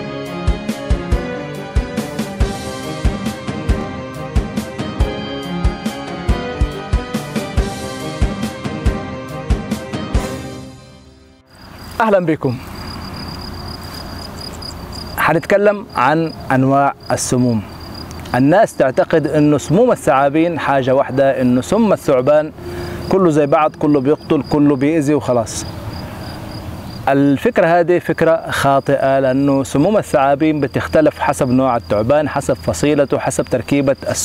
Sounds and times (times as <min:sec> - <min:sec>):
Outside, rural or natural: 0:00.0 - 0:34.2
Speech: 0:12.0 - 0:12.7, 0:15.2 - 0:17.7, 0:18.3 - 0:22.5, 0:23.1 - 0:25.7, 0:27.1 - 0:34.2.